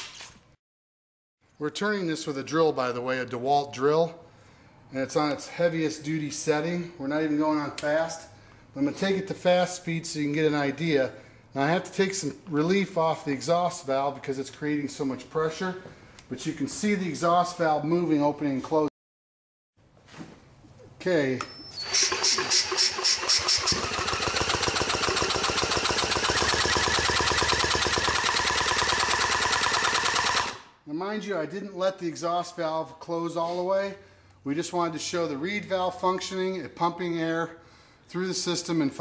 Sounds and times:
Speech: 0:01.6 - 0:04.2, 0:04.9 - 0:18.9, 0:21.0 - 0:21.5, 0:30.9 - 0:39.0.

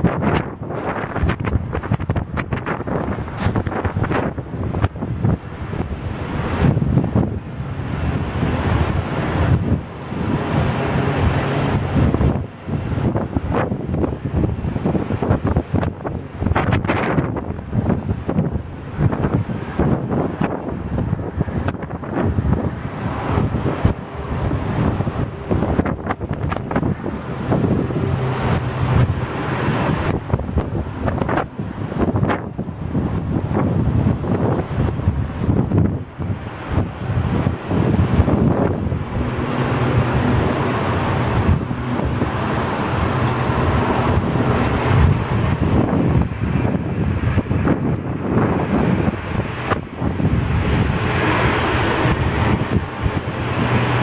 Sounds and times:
Fixed-wing aircraft, airplane: 0:00.0 - 0:54.0
Outside, urban or manmade: 0:00.0 - 0:54.0.

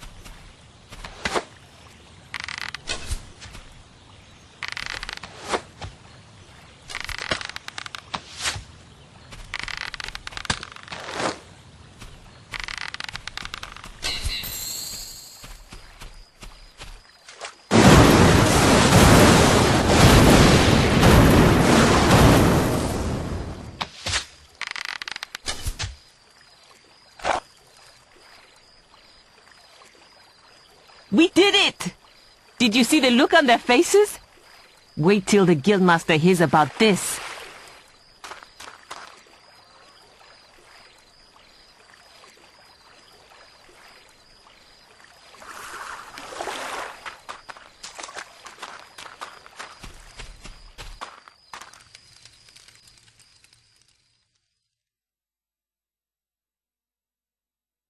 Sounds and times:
Outside, rural or natural: 0:00.0 - 0:57.8.

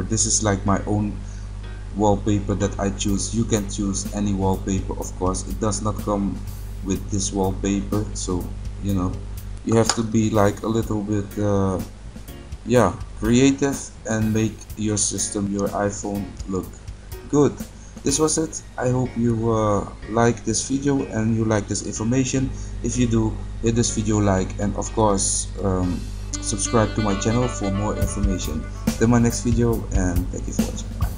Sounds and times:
Speech: 0:00.0 - 0:01.2, 0:02.0 - 0:11.9, 0:12.7 - 0:16.7, 0:17.3 - 0:31.1
Music: 0:00.0 - 0:31.1.

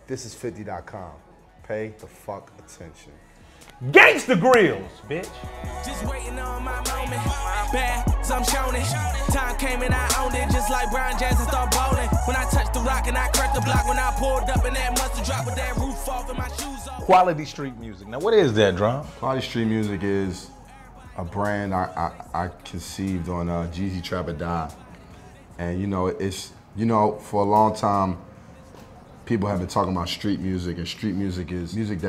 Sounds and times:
Music: 0:00.0 - 0:32.0
Speech: 0:03.8 - 0:05.4, 0:17.1 - 0:20.5.

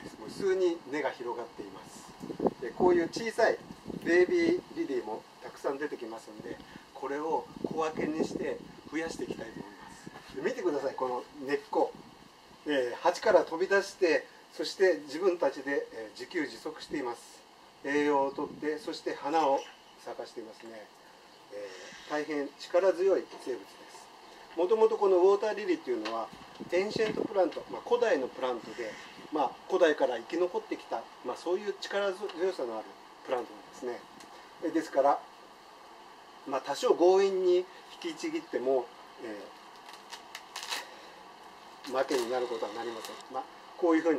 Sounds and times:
Speech: 0:00.0 - 0:12.0, 0:12.7 - 0:35.3, 0:36.4 - 0:39.6, 0:41.9 - 0:44.1.

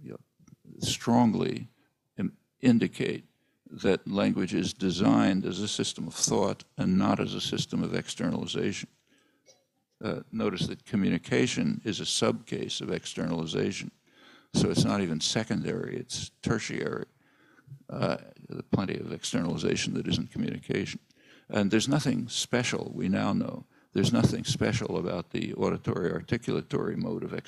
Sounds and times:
Male speech, man speaking: 0:00.0 - 0:00.2, 0:00.8 - 0:03.2, 0:03.8 - 0:08.9, 0:10.0 - 0:14.0, 0:14.6 - 0:17.1, 0:17.9 - 0:27.4
Narration, monologue: 0:00.0 - 0:27.4.

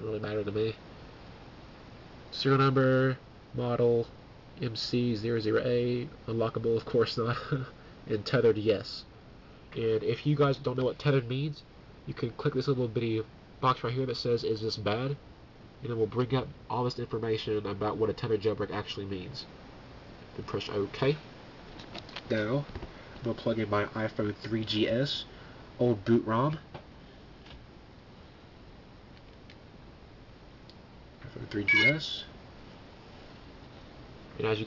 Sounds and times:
Speech: 0:00.0 - 0:00.8, 0:02.3 - 0:09.1, 0:09.7 - 0:15.2, 0:15.8 - 0:19.6, 0:20.3 - 0:21.3, 0:22.3 - 0:26.7, 0:31.2 - 0:32.4, 0:34.3 - 0:34.6
Inside, small room: 0:00.0 - 0:34.6.

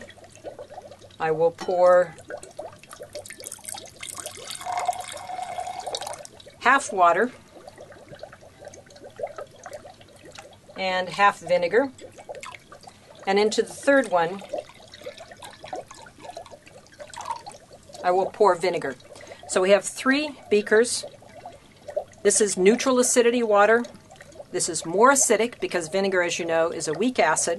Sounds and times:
Pour: 0:00.0 - 0:27.5.

